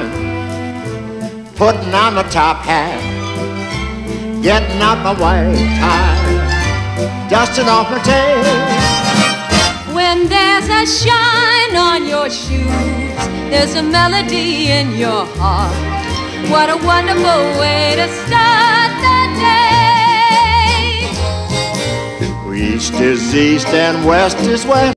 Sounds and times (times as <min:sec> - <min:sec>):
Music: 0:00.0 - 0:24.9
Male singing: 0:04.4 - 0:06.4, 0:07.3 - 0:08.8, 0:22.5 - 0:24.9
Female singing: 0:16.5 - 0:21.1.